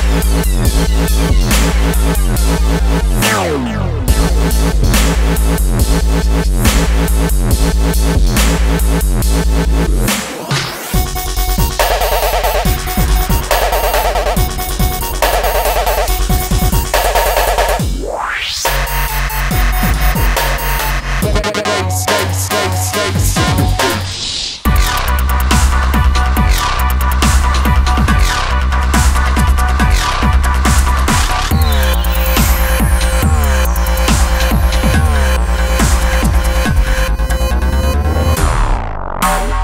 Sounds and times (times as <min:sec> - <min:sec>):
Dubstep: 0:00.0 - 0:39.6
Sound effect: 0:09.8 - 0:39.6.